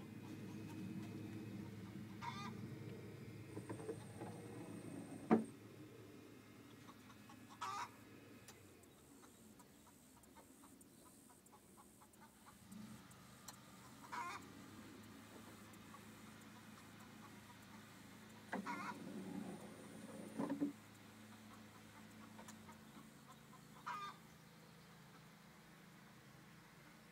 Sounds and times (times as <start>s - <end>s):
Sliding door: 3.5s - 5.6s, 18.5s - 20.8s.